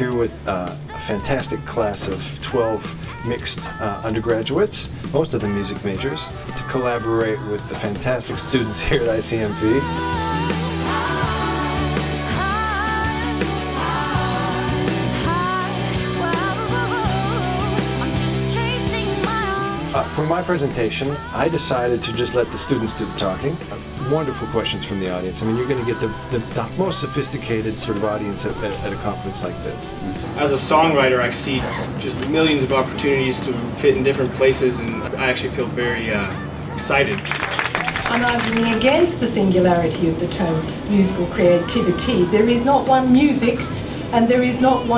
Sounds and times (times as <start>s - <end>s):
Speech: 0.0s - 9.9s, 20.0s - 37.4s, 38.1s - 44.9s
Progressive rock: 9.9s - 20.2s.